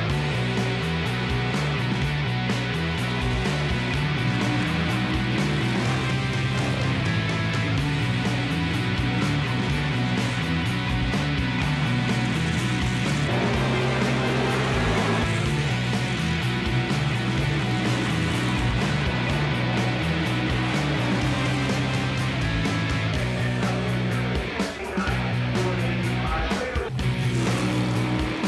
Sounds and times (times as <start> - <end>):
Music: 0.0 - 28.4.